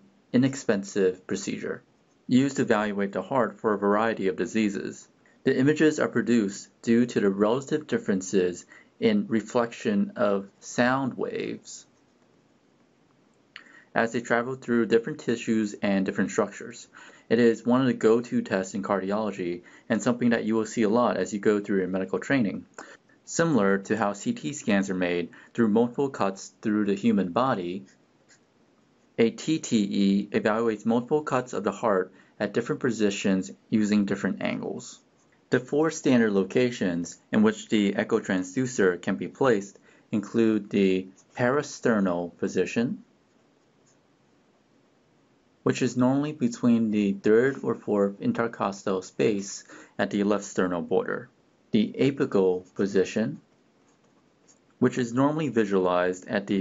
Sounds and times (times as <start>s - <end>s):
Speech: 0.4s - 11.9s, 13.6s - 27.9s, 29.2s - 43.1s, 45.7s - 53.4s, 54.8s - 56.6s.